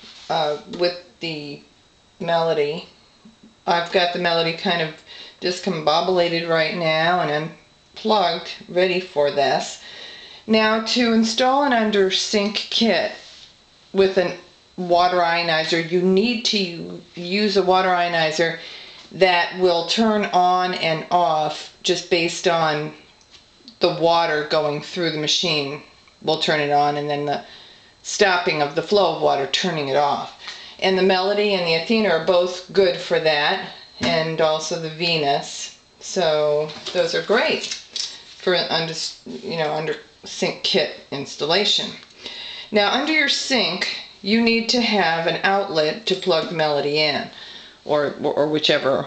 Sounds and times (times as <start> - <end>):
Speech: 0.3 - 2.9, 3.6 - 9.8, 10.5 - 13.2, 14.0 - 23.0, 23.7 - 42.0, 42.7 - 49.0.